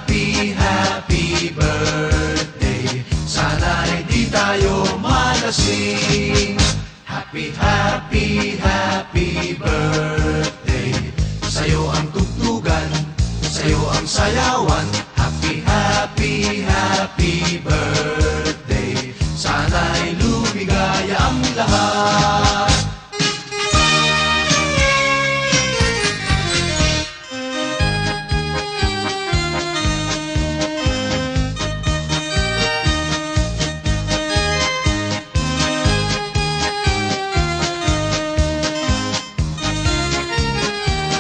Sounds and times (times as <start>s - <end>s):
Reggae: 0.0s - 41.2s.